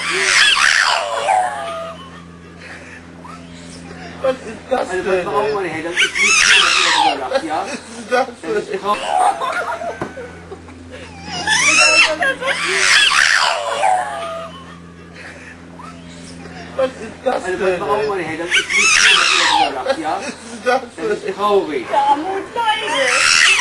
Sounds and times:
Yip: 0.0s - 2.1s, 6.0s - 7.2s, 11.3s - 14.7s, 18.5s - 19.7s, 22.8s - 23.6s
Whimper (dog): 0.0s - 4.0s, 6.0s - 7.2s, 11.0s - 16.5s, 18.5s - 20.0s, 21.9s - 23.6s
Speech: 16.8s - 23.4s.

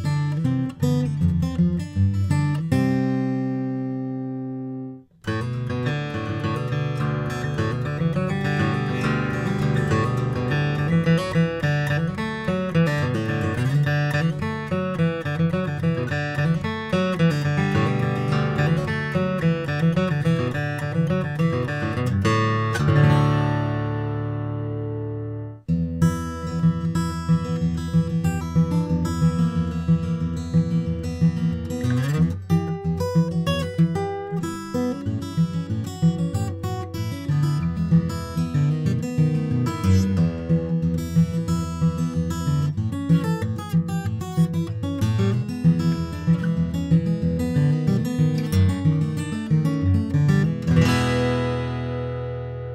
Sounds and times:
Acoustic guitar: 0.0s - 52.7s
Inside, small room: 0.0s - 52.7s.

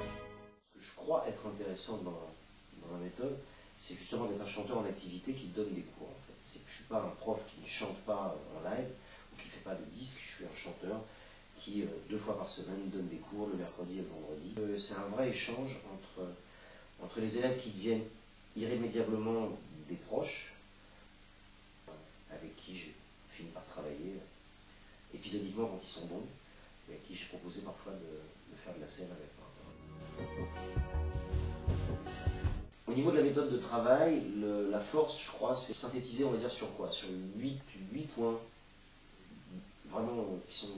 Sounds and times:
Music: 0.0s - 0.7s, 29.7s - 32.8s
Speech: 0.7s - 20.6s, 21.9s - 24.4s, 25.1s - 29.8s, 32.9s - 38.6s, 39.2s - 40.7s.

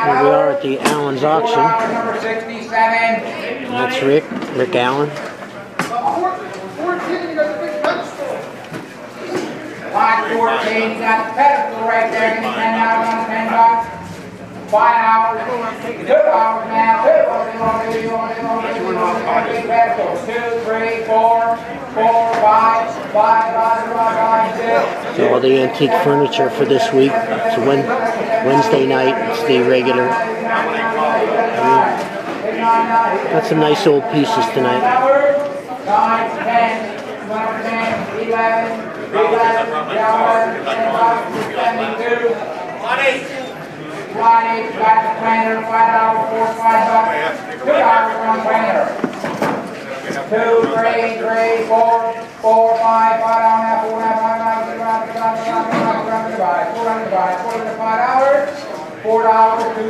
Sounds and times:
Speech: 0.0s - 5.2s, 14.7s - 49.0s.

